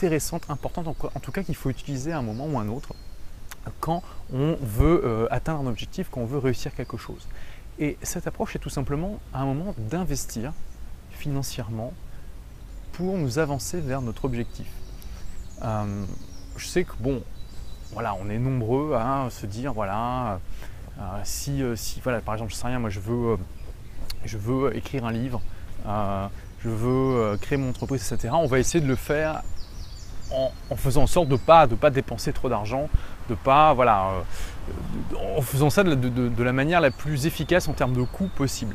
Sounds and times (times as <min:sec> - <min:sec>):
Speech: 0:00.0 - 0:12.0, 0:12.9 - 0:14.8, 0:15.6 - 0:17.3, 0:17.9 - 0:20.4, 0:21.0 - 0:23.5, 0:24.1 - 0:29.5, 0:30.3 - 0:38.7.